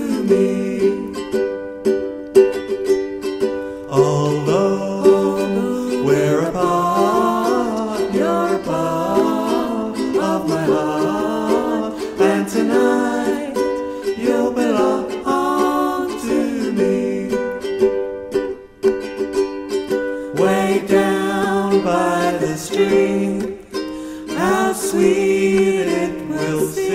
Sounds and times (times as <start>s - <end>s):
Ukulele: 0.0s - 26.9s.